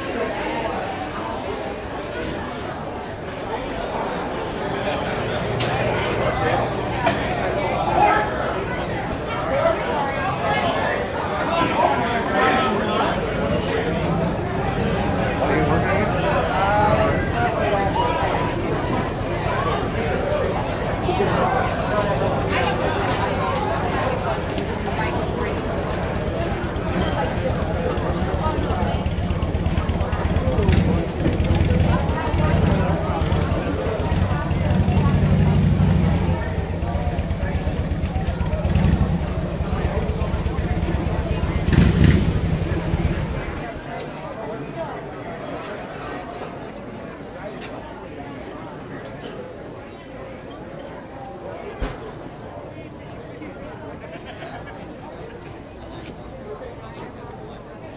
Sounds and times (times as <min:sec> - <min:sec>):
Speech: 0:00.0 - 0:57.9.